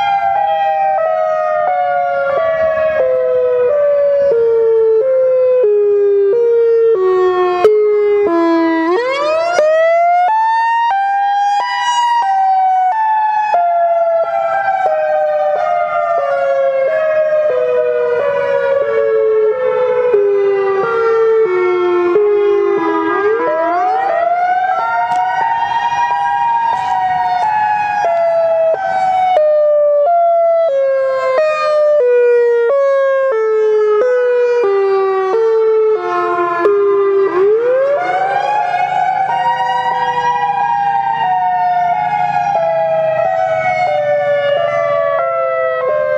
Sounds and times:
Siren: 0.0 - 46.1.

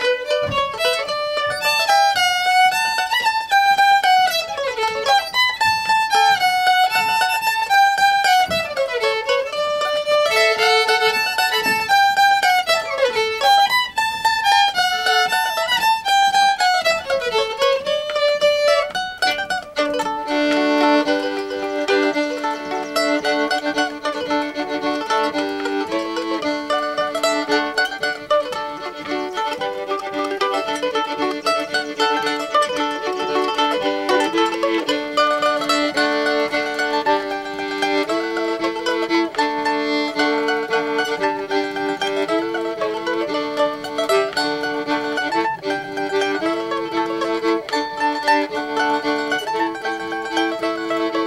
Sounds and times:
Mandolin: 0.0 - 51.2.

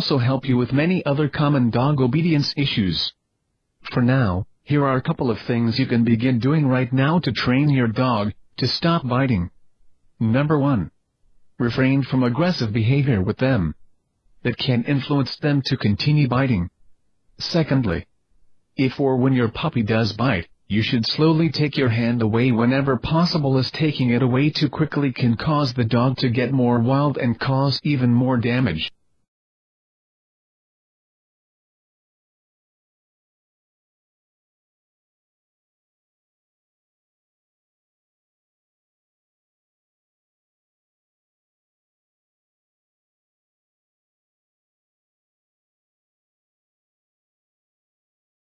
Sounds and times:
Speech synthesizer: 0.0 - 3.2, 3.9 - 9.5, 10.2 - 10.9, 11.6 - 13.8, 14.5 - 16.7, 17.4 - 18.1, 18.8 - 28.9.

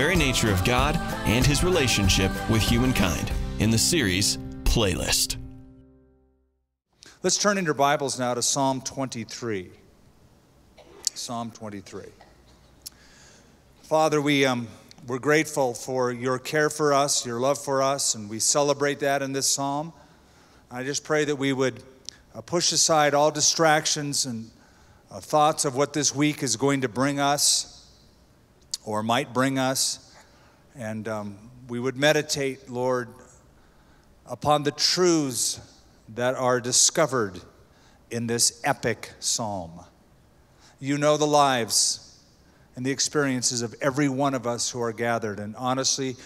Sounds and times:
Speech: 0.0 - 5.4, 7.2 - 9.8, 10.9 - 12.3, 13.9 - 20.0, 20.7 - 21.8, 22.4 - 24.5, 25.1 - 27.8, 28.8 - 30.0, 30.8 - 33.2, 34.3 - 37.5, 38.1 - 39.9, 40.8 - 42.1, 42.8 - 46.2.

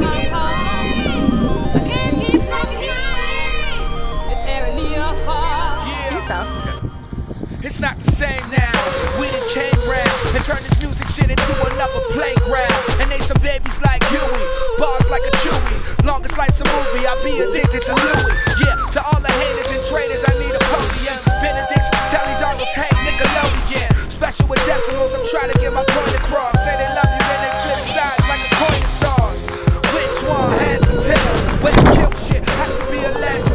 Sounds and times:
Music: 0.0 - 33.5.

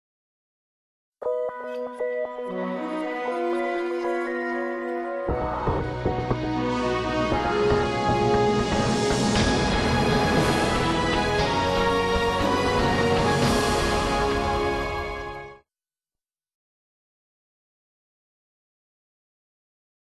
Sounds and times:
Music: 1.2 - 15.7.

